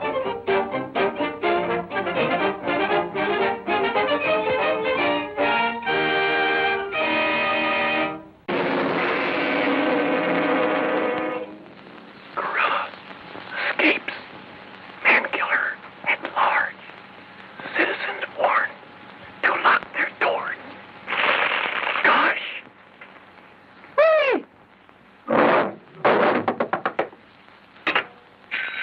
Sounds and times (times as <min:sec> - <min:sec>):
Speech: 0:19.4 - 0:20.7.